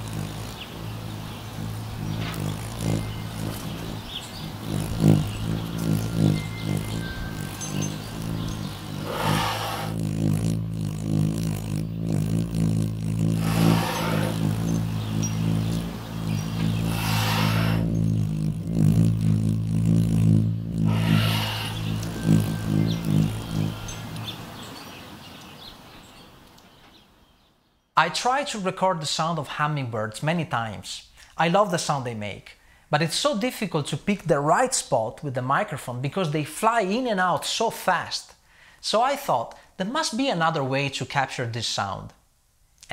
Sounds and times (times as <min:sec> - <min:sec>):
Speech: 0:28.0 - 0:42.2.